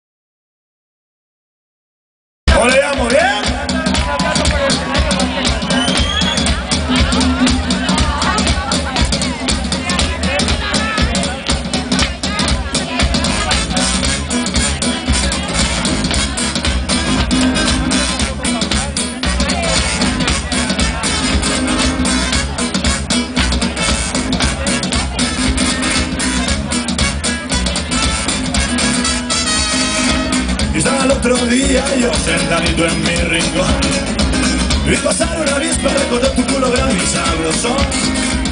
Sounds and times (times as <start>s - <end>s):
Music: 2.5s - 38.5s
Speech: 2.5s - 38.5s.